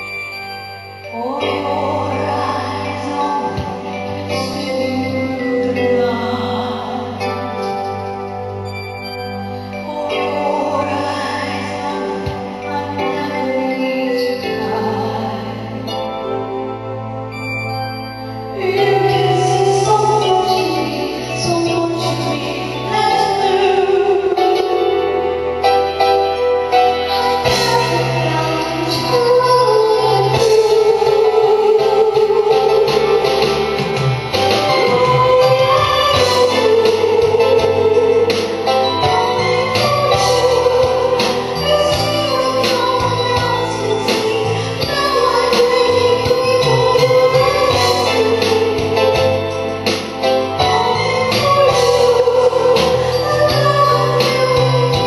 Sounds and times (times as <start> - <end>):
Music: 0.0 - 55.0
Female singing: 1.1 - 7.8, 9.8 - 15.8, 18.6 - 25.2, 27.1 - 33.8, 34.4 - 49.4, 50.6 - 55.0.